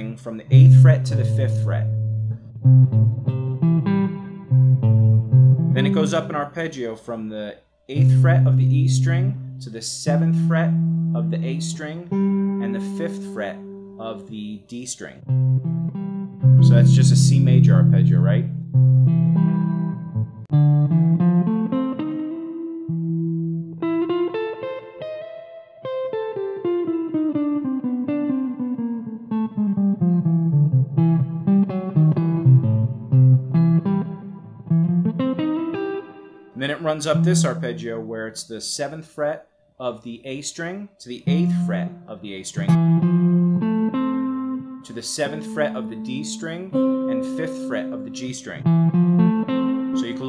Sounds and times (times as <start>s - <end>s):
Speech: 0.0s - 2.0s, 5.8s - 15.2s, 16.6s - 18.5s, 36.6s - 42.8s, 44.8s - 48.7s, 50.0s - 50.2s
Guitar: 0.0s - 50.2s.